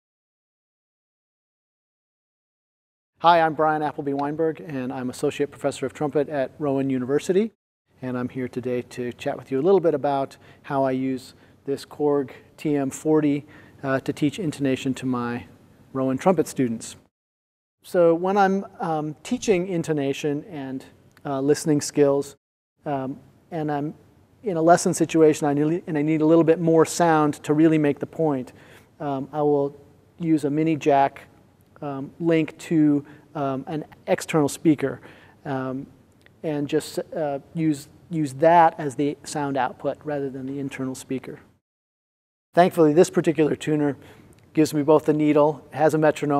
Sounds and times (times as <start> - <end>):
Speech: 3.2 - 17.1, 17.8 - 41.5, 42.6 - 46.3.